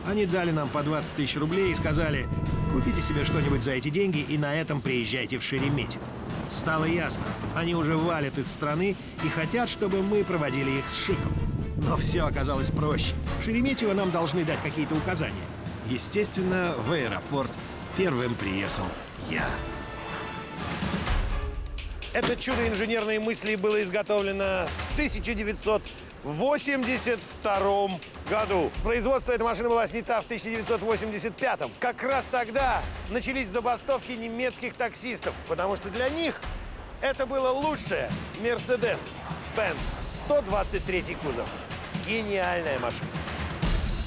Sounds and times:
Speech: 0:00.0 - 0:19.6, 0:22.2 - 0:36.4, 0:37.0 - 0:43.1
Music: 0:00.0 - 0:44.0.

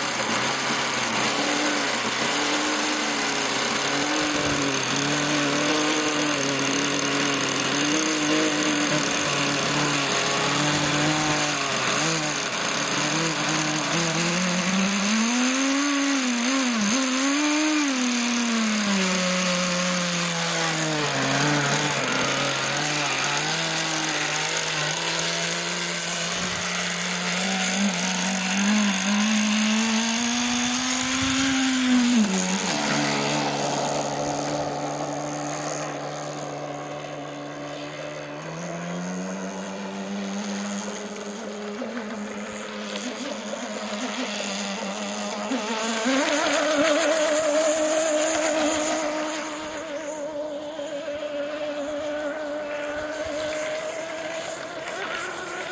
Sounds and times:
Vehicle: 0:00.0 - 0:55.7.

